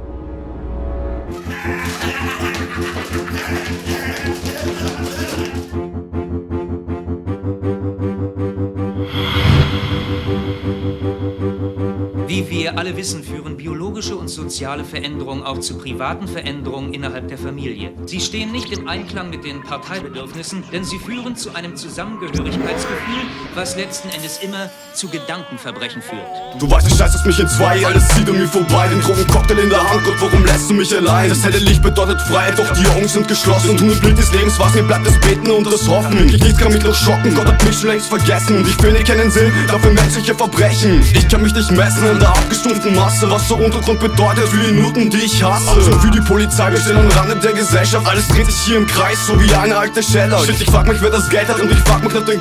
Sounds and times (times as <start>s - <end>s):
Music: 0.0s - 52.4s
Speech: 3.4s - 5.7s, 12.3s - 27.0s, 40.6s - 46.1s.